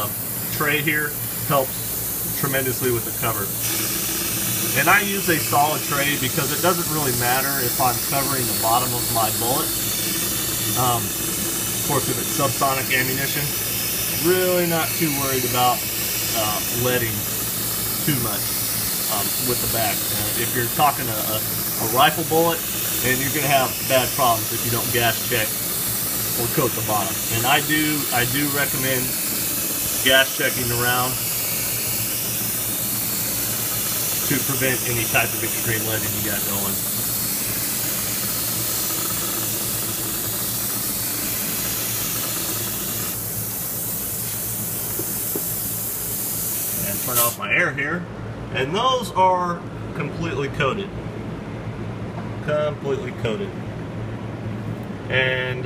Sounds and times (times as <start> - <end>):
Hiss: 0.0 - 47.4.